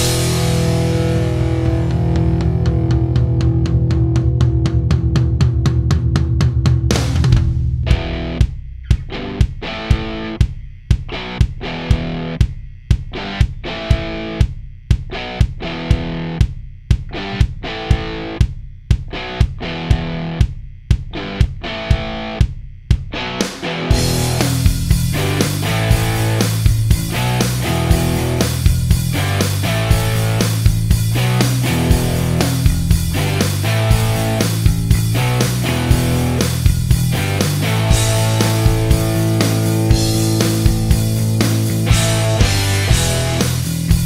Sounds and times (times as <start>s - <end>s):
Electric guitar: 0.0s - 10.4s, 11.1s - 12.4s, 13.1s - 14.5s, 15.1s - 16.4s, 17.1s - 18.4s, 19.1s - 20.4s, 21.1s - 22.4s, 23.1s - 44.0s
Strum: 0.0s - 44.0s.